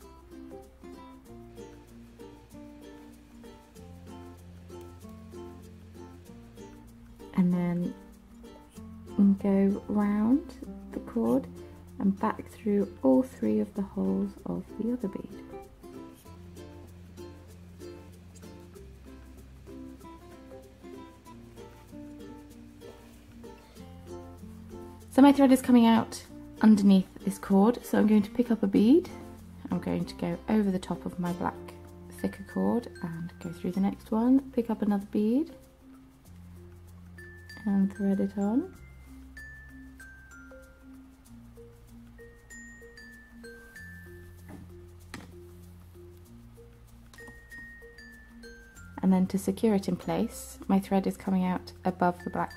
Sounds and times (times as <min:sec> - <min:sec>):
Glockenspiel: 0:29.1 - 0:52.5
Marimba, xylophone: 0:29.1 - 0:52.5
Chime: 0:37.2 - 0:41.5, 0:42.2 - 0:44.7, 0:47.2 - 0:49.1, 0:52.1 - 0:52.5.